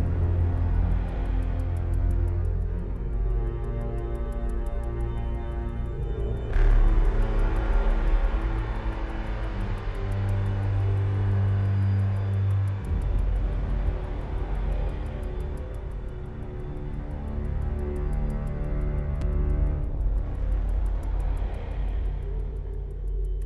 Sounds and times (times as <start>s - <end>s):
Music: 0.0s - 23.4s.